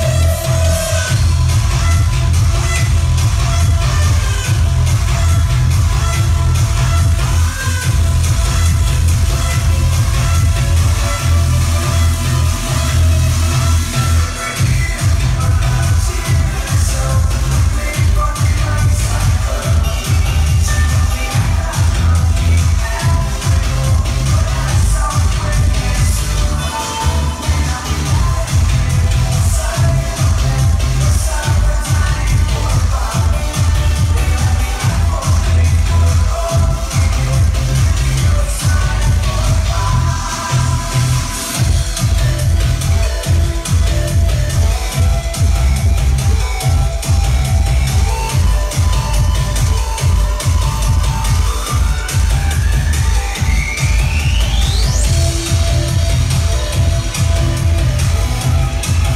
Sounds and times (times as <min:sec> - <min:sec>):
Music: 0:00.0 - 0:59.1.